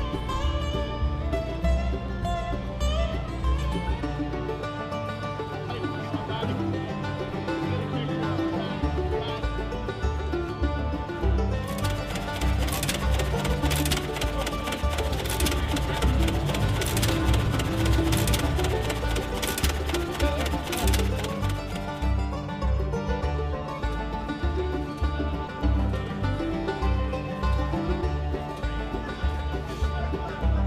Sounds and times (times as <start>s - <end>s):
Music: 0.0s - 30.6s
Speech: 5.4s - 9.8s, 28.9s - 30.6s.